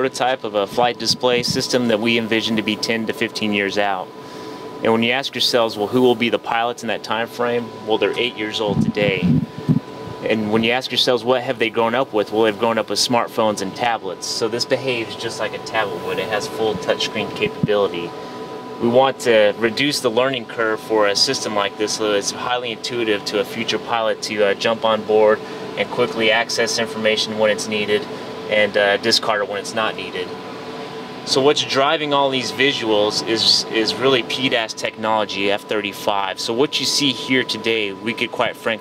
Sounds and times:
Speech: 0.0 - 4.1, 4.8 - 9.4, 10.2 - 18.1, 18.8 - 30.4, 31.3 - 38.8.

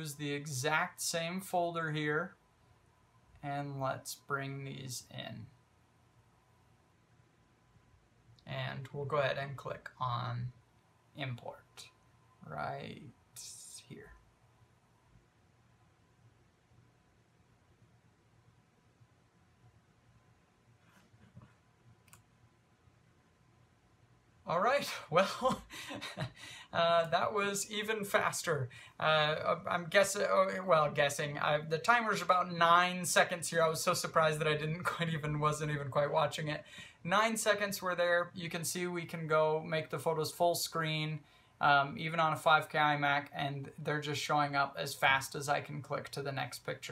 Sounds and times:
Silence: 2.3 - 3.6, 4.2 - 30.9.

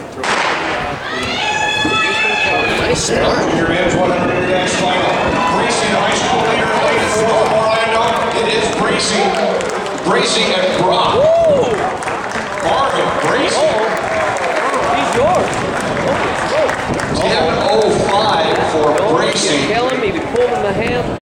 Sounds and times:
Outside, urban or manmade: 0.0 - 21.2
Speech: 17.2 - 21.2.

